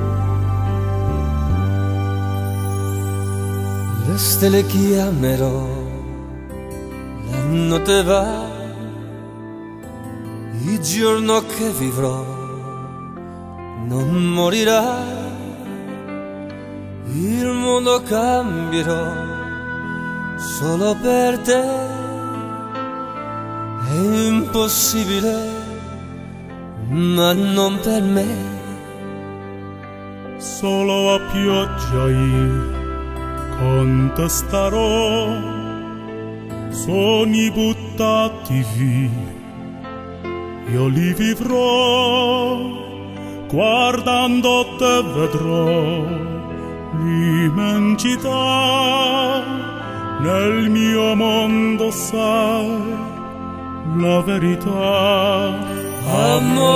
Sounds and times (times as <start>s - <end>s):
Classical music: 0.0s - 56.7s.